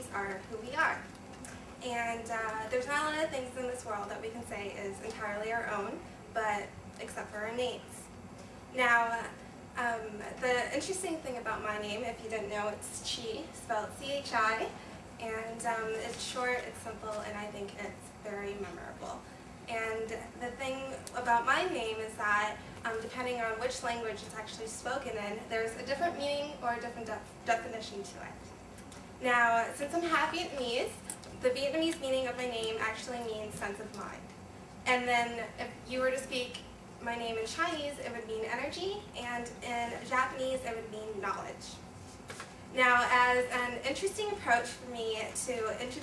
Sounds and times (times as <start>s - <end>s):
Female speech, woman speaking: 0.0s - 1.1s, 1.8s - 8.2s, 8.8s - 28.5s, 29.2s - 34.3s, 34.9s - 41.8s, 42.7s - 46.0s.